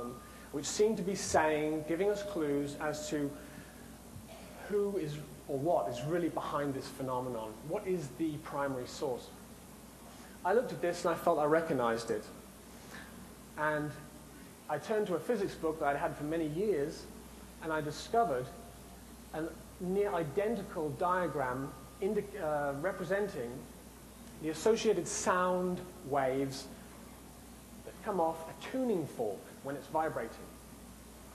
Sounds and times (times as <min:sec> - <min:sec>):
Speech: 0:00.0 - 0:03.4, 0:04.5 - 0:09.4, 0:10.4 - 0:12.4, 0:13.6 - 0:14.1, 0:14.7 - 0:18.6, 0:19.3 - 0:23.7, 0:24.4 - 0:26.7, 0:27.9 - 0:30.6.